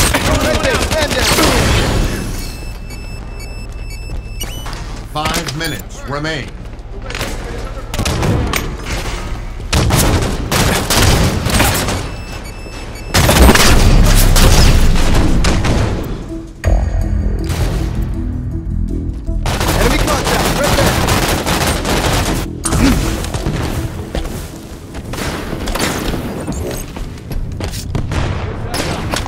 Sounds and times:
Music: 14.9s - 26.2s.

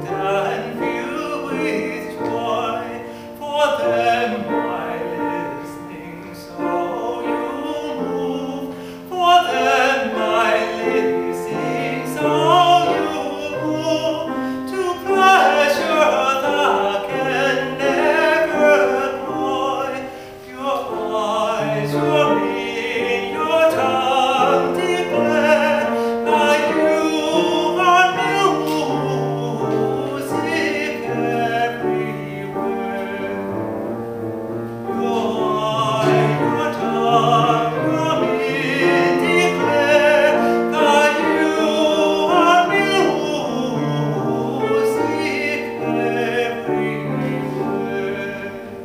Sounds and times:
Soul music: 0.0s - 48.8s.

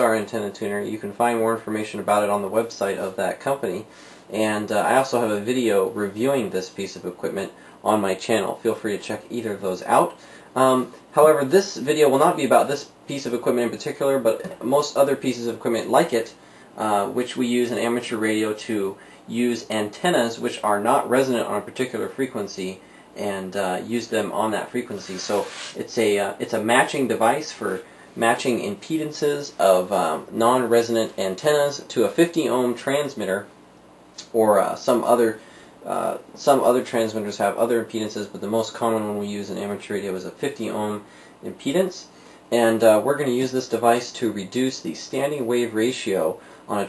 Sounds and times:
Speech: 0.0s - 33.6s, 34.2s - 46.8s.

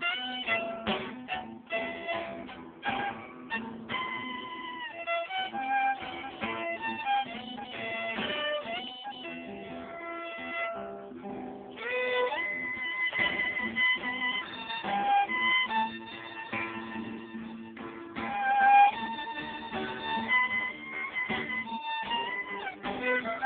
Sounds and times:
Violin, fiddle: 0.0s - 10.9s, 11.8s - 23.4s.

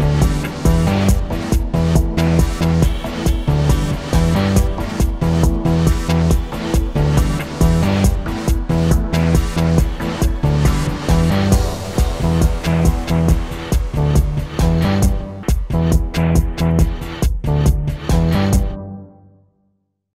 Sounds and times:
Music: 0.0s - 20.1s.

